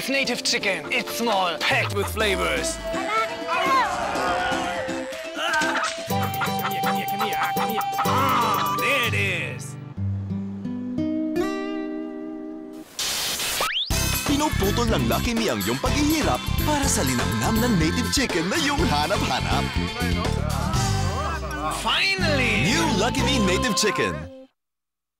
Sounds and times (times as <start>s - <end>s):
Music: 0.0s - 12.9s, 13.9s - 24.5s
Speech: 14.3s - 24.2s.